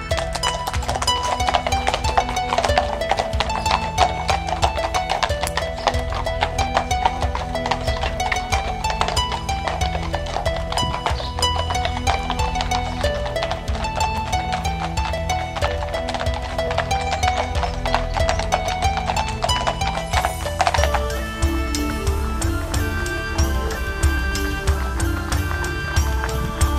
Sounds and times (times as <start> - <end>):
Clip-clop: 0.0 - 26.7
Music: 0.0 - 26.7.